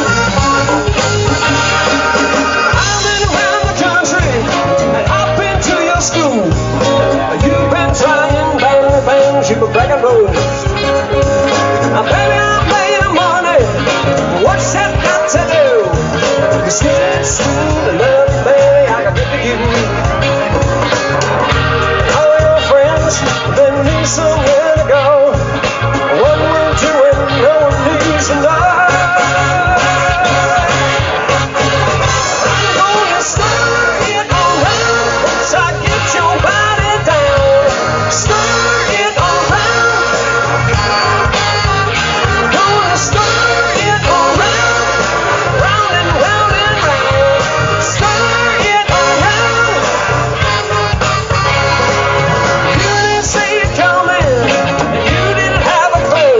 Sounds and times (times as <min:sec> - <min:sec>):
Music: 0:00.0 - 0:56.4
Singing: 0:02.7 - 0:10.5, 0:32.3 - 0:50.6, 0:52.7 - 0:56.4.